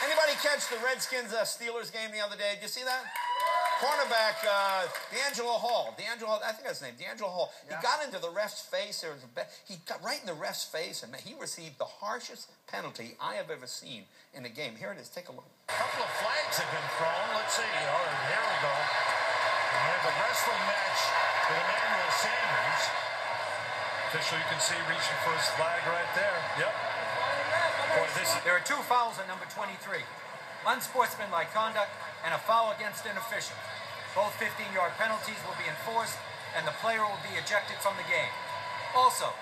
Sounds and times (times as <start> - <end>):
Speech: 0.0 - 3.1, 3.8 - 19.0, 19.7 - 23.0, 27.5 - 33.6, 34.2 - 38.4, 39.0 - 39.4.